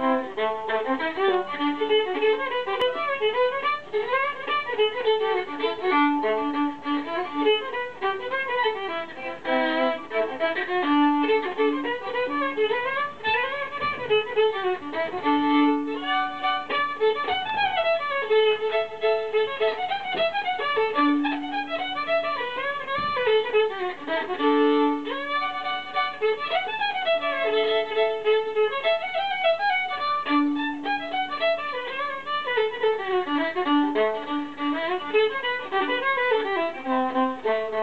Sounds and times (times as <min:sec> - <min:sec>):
Violin, fiddle: 0:00.0 - 0:37.8.